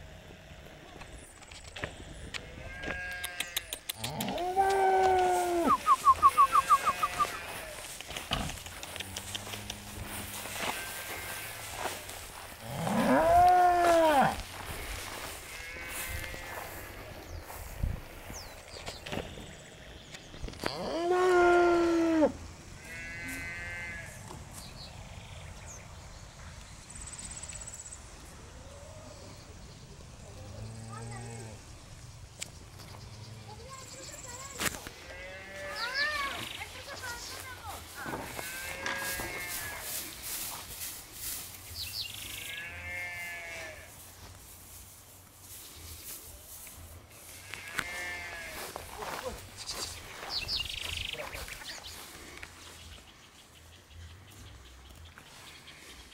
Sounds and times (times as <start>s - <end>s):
Moo: 2.7s - 5.7s, 12.6s - 14.4s, 20.6s - 24.1s.